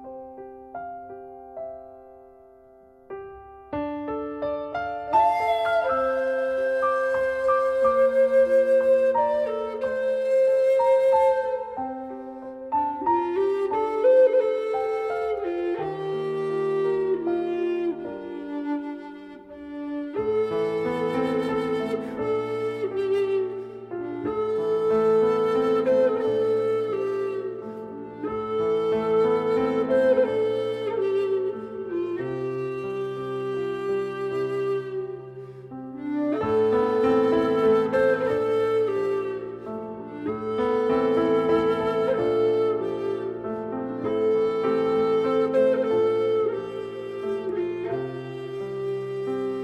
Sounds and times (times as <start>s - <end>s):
Music: 0.0s - 49.6s.